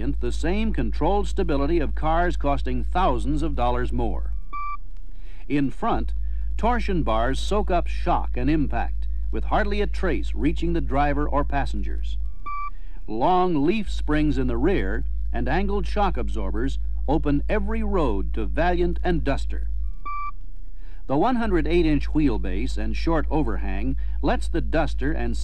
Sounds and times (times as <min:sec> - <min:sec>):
Speech: 0:00.0 - 0:04.3, 0:05.5 - 0:12.2, 0:13.1 - 0:19.7, 0:21.1 - 0:25.4.